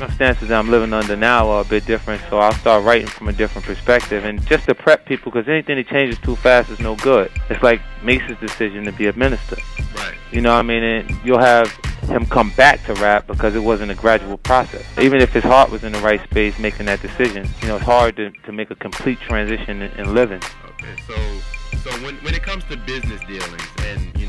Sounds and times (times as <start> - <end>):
Exciting music: 0.0 - 4.7, 6.1 - 18.1, 19.0 - 24.2
Speech: 0.0 - 24.2.